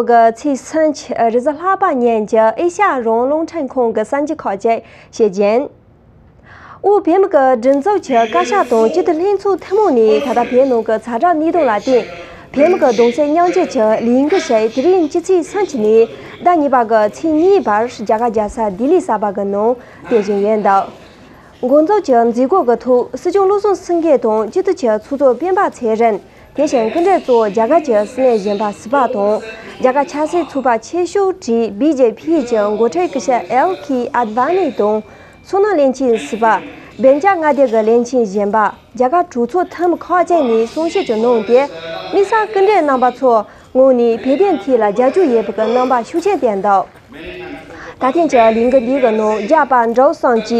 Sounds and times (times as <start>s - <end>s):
Speech: 0.0s - 5.7s, 6.8s - 50.6s.